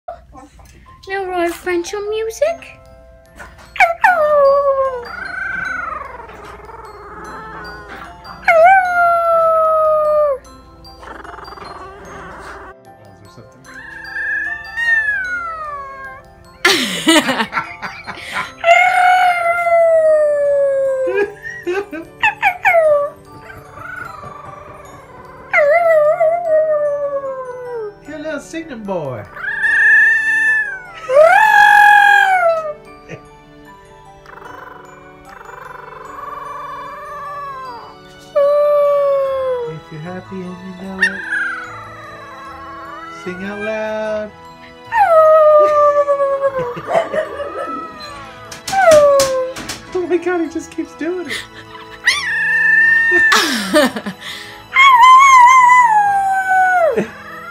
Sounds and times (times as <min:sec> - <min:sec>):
Music: 0:00.1 - 0:57.5.